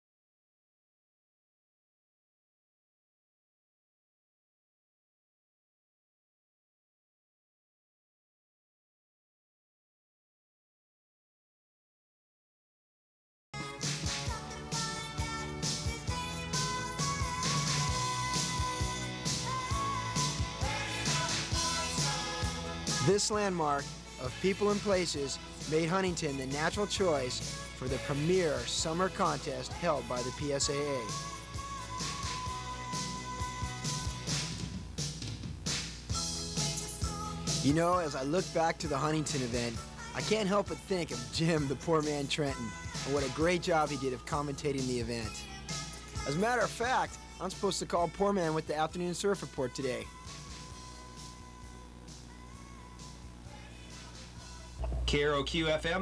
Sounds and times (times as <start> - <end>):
Music: 13.6 - 56.0
Narration, monologue: 23.0 - 31.1, 37.6 - 45.4, 46.2 - 50.1.